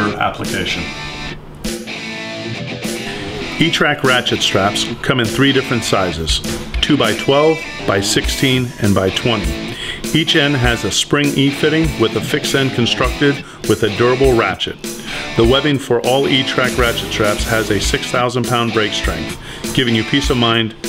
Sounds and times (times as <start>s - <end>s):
Speech: 0.0s - 1.0s, 3.6s - 14.8s, 15.4s - 20.8s
Music: 0.0s - 20.8s.